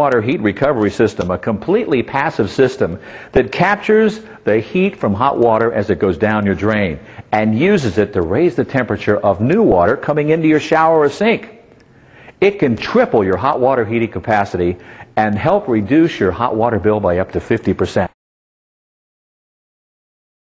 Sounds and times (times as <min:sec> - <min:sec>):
Speech: 0:00.0 - 0:11.6, 0:12.4 - 0:18.2.